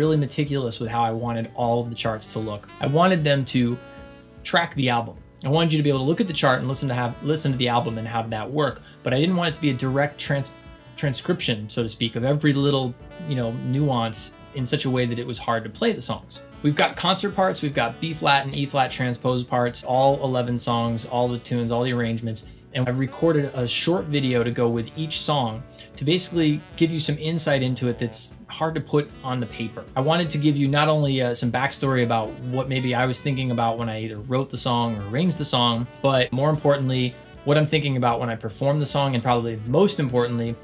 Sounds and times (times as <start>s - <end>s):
Speech: 0.0s - 3.8s, 4.4s - 40.6s
Music: 0.0s - 40.6s.